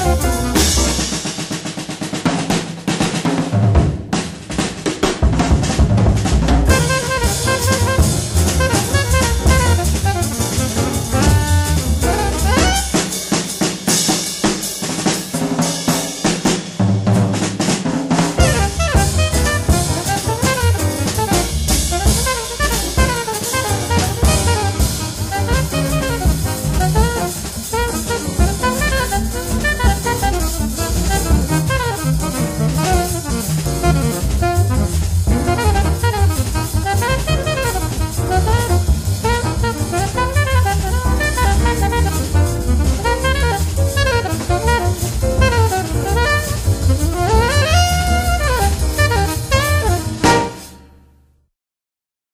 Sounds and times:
Drum roll: 0.0 - 51.1.

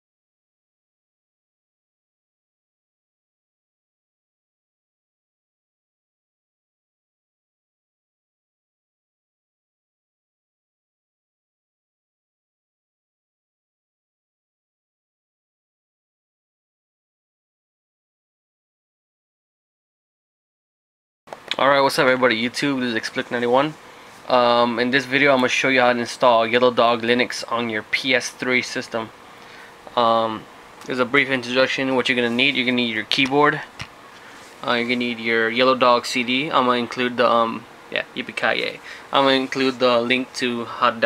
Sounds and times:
Speech: 21.5 - 29.1, 29.9 - 33.8, 34.6 - 41.0.

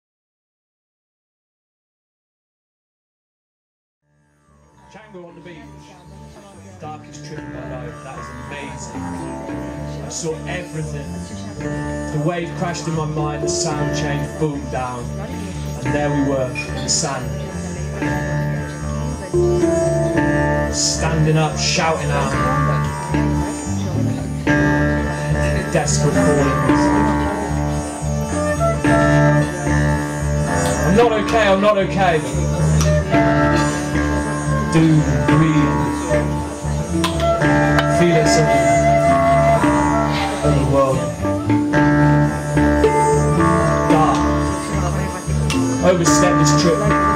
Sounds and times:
Music: 4.0 - 47.1
Speech: 4.9 - 19.8, 20.6 - 24.4, 25.3 - 27.3, 30.6 - 32.8, 34.6 - 37.0, 37.6 - 39.6, 40.2 - 41.2, 43.6 - 47.1.

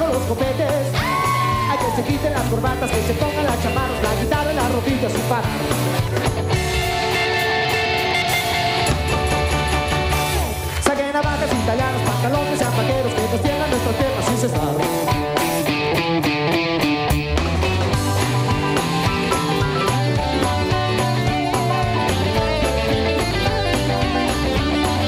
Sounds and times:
Rock and roll: 0.0 - 25.0.

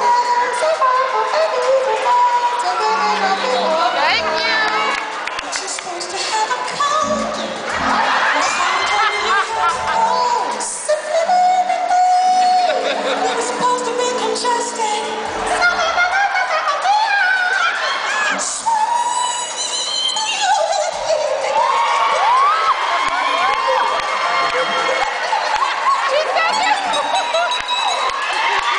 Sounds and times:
Singing: 0.0 - 22.5
Music: 0.0 - 25.3, 26.0 - 28.7
Inside, large room or hall: 0.0 - 28.7.

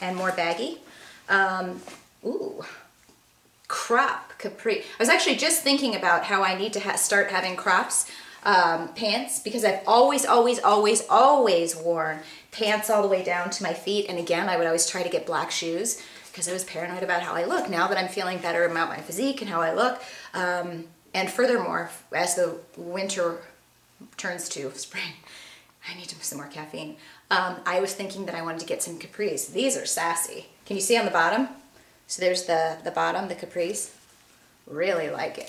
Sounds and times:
Speech: 0.0 - 2.9, 3.7 - 25.2, 25.8 - 34.0, 34.7 - 35.4
Inside, small room: 0.0 - 35.4.

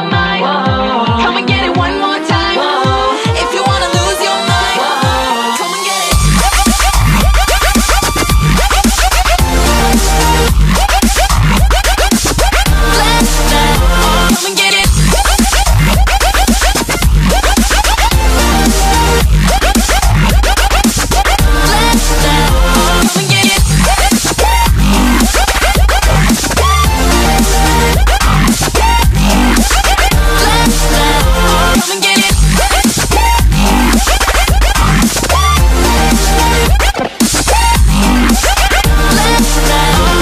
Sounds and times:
Music: 0.0 - 40.2.

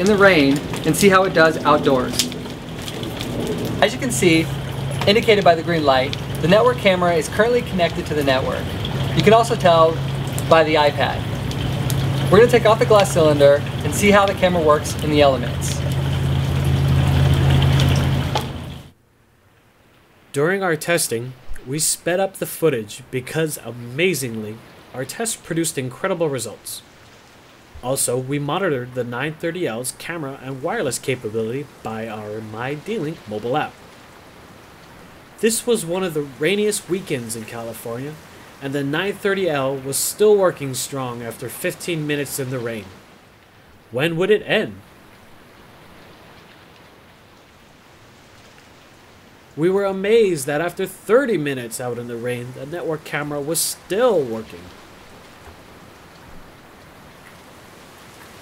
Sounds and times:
Speech: 0.0 - 2.3, 3.8 - 11.2, 12.3 - 15.8, 20.4 - 26.8, 27.8 - 33.8, 35.4 - 43.0, 43.9 - 44.8, 49.6 - 54.7
Rain on surface: 0.0 - 58.4.

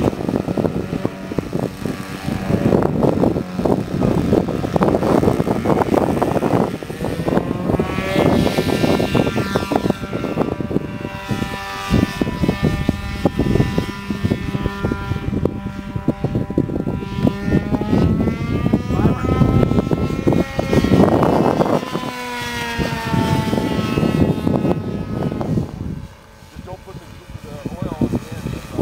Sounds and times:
Aircraft: 0.0 - 28.8.

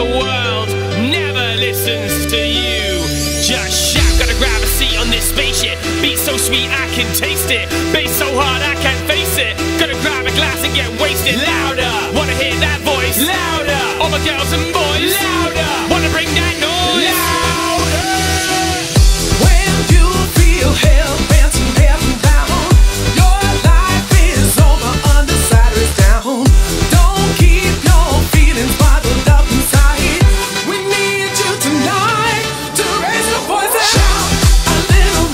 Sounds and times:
Music: 0.0 - 35.3.

